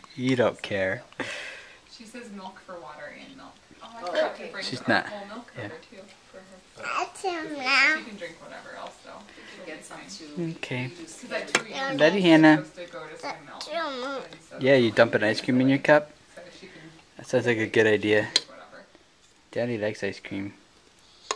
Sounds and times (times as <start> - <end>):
Inside, small room: 0.0 - 21.3
Child speech, kid speaking: 4.0 - 4.4, 6.8 - 8.2, 11.6 - 12.2, 13.1 - 14.4.